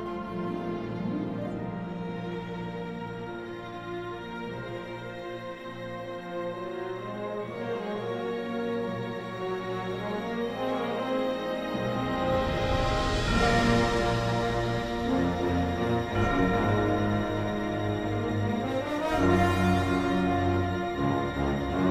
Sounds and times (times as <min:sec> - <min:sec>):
Background music: 0:00.0 - 0:21.9
Tender music: 0:00.0 - 0:21.9
Theme music: 0:00.0 - 0:21.9
Soundtrack music: 0:09.8 - 0:21.9.